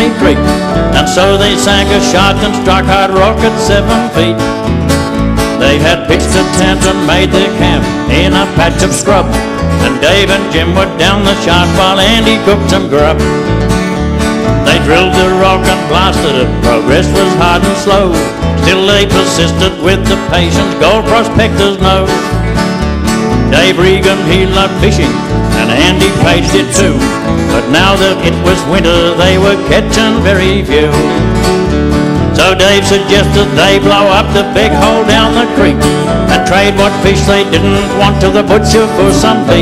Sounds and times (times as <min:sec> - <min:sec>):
Music: 0:00.0 - 0:39.6.